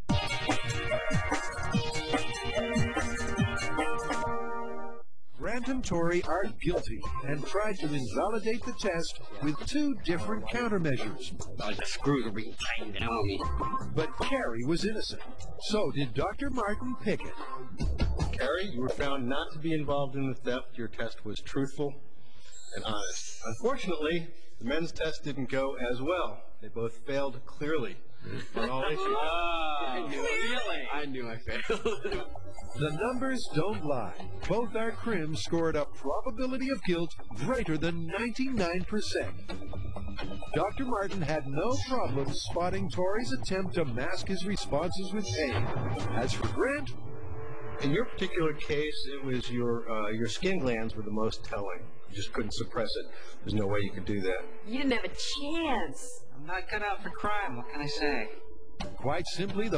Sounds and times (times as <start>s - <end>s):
Speech: 5.4s - 17.3s, 18.4s - 22.0s, 22.8s - 28.0s, 32.8s - 39.3s, 40.6s - 45.6s, 47.8s - 55.9s, 59.0s - 59.7s.